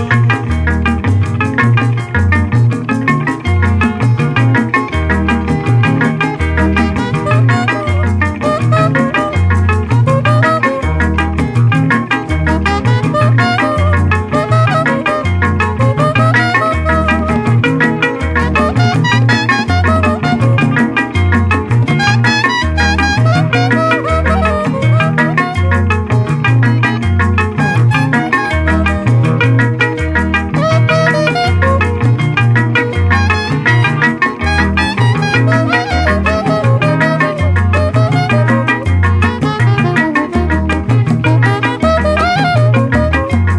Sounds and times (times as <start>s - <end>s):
Traditional music: 0.0s - 43.5s.